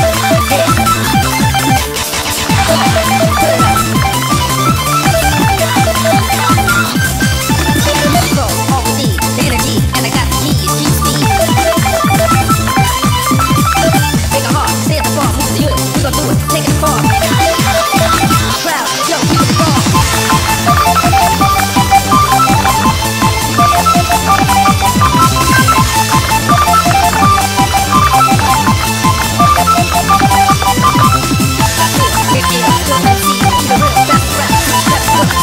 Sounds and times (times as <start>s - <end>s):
Music: 0.0s - 35.4s
Telephone: 0.0s - 35.4s.